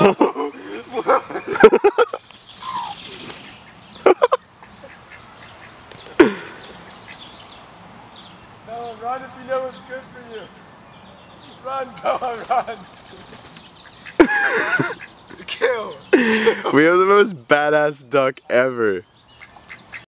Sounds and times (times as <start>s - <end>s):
Speech: 8.7s - 10.5s.